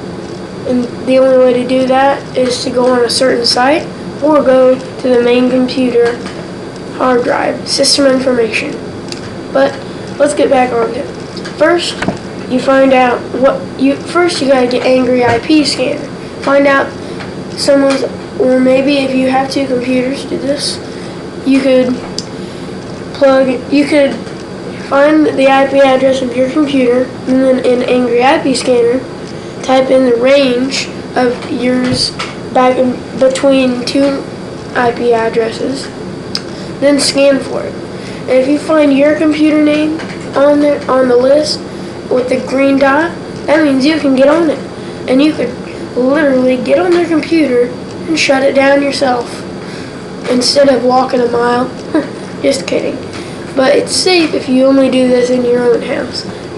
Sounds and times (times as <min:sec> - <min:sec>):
Speech: 0:00.7 - 0:06.3, 0:06.9 - 0:08.9, 0:09.6 - 0:17.0, 0:17.6 - 0:22.2, 0:23.2 - 0:36.0, 0:36.8 - 0:49.5, 0:50.3 - 0:56.4.